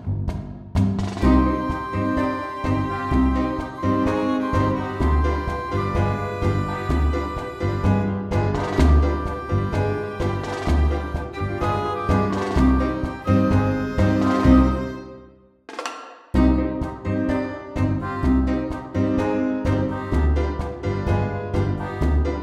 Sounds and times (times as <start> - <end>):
Music: 0.0 - 22.4.